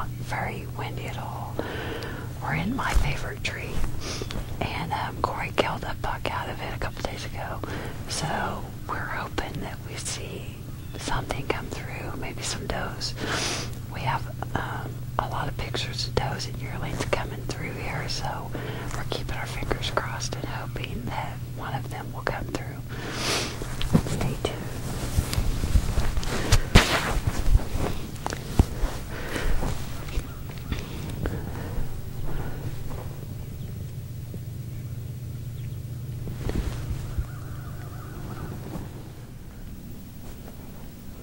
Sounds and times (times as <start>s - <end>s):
Speech: 0.0s - 1.6s, 2.4s - 3.9s, 4.6s - 13.2s, 13.9s - 22.8s.